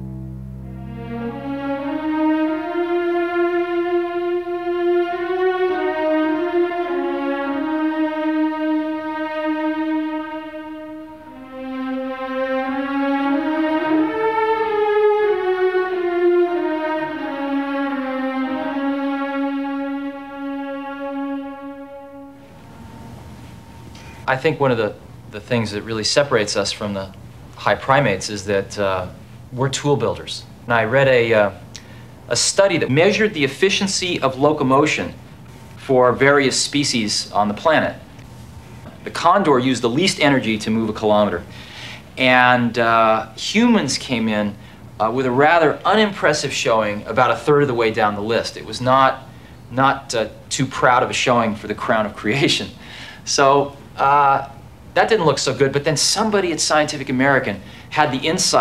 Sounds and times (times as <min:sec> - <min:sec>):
Speech: 0:24.3 - 0:31.6, 0:32.3 - 0:35.2, 0:35.8 - 0:38.0, 0:38.9 - 0:41.5, 0:42.2 - 0:58.6.